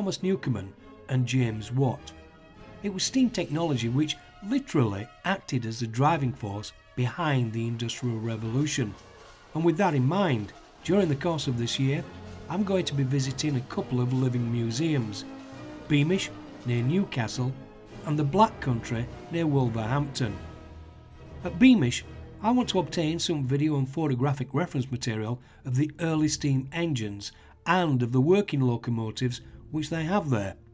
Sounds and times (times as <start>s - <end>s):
Speech: 0.0s - 2.1s, 2.8s - 9.0s, 9.6s - 15.3s, 15.9s - 20.4s, 21.4s - 30.6s
Music: 0.0s - 30.7s.